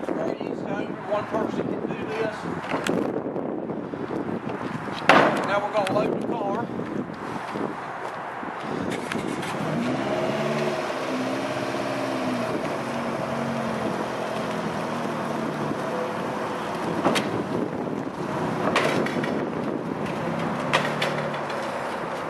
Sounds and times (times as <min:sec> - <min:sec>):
Speech: 0:00.0 - 0:02.5, 0:05.5 - 0:06.7
Car: 0:06.8 - 0:22.2.